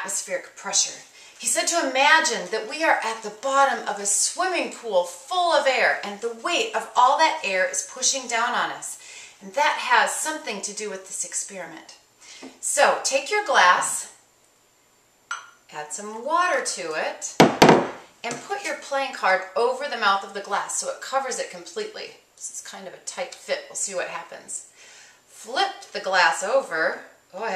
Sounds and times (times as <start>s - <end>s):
Speech: 0.0s - 12.0s, 12.6s - 14.2s, 15.7s - 17.4s, 18.2s - 24.7s, 25.4s - 27.5s
Chink, clink: 15.3s - 15.6s.